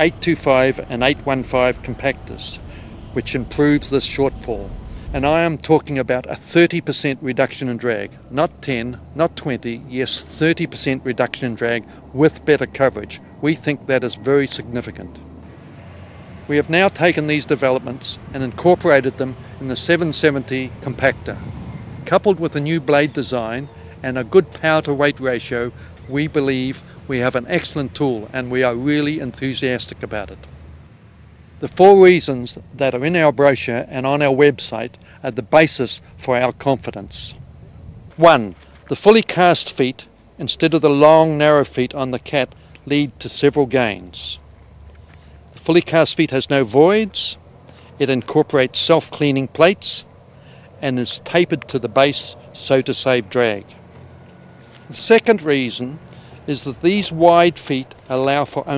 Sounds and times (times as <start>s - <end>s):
Speech: 0.0s - 2.6s, 3.2s - 15.2s, 16.5s - 21.4s, 22.1s - 30.5s, 31.6s - 37.4s, 38.2s - 44.4s, 45.6s - 47.4s, 48.0s - 50.1s, 50.8s - 53.8s, 54.9s - 58.7s.